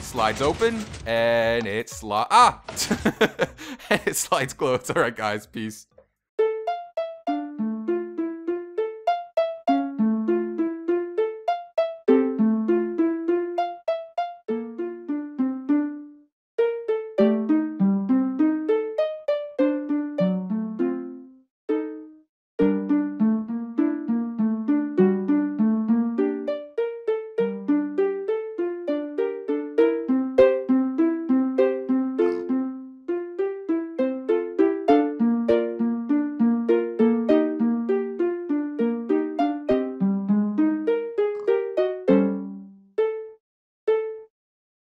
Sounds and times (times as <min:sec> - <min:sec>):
Music: 0:06.4 - 0:44.3.